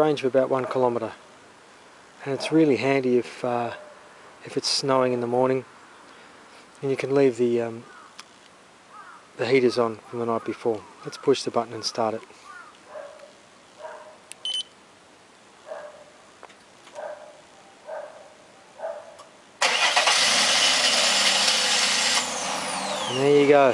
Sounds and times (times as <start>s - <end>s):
Engine starting: 19.6s - 23.2s
Vehicle: 19.6s - 23.7s.